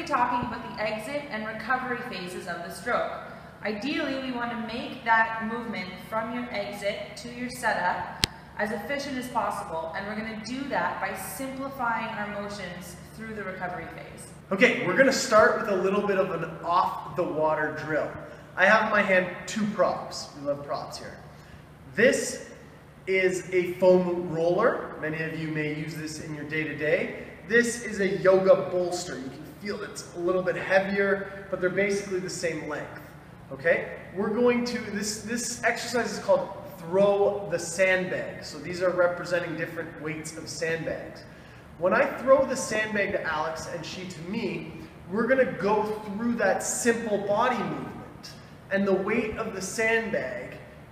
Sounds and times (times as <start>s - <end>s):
Speech: 0.0s - 21.2s, 21.9s - 22.5s, 23.1s - 50.7s.